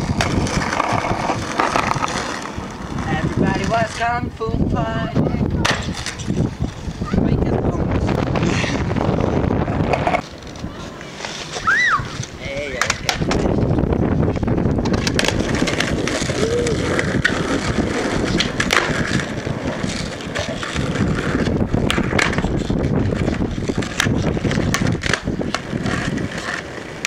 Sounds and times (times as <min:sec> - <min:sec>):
Skateboard: 0:00.0 - 0:27.0.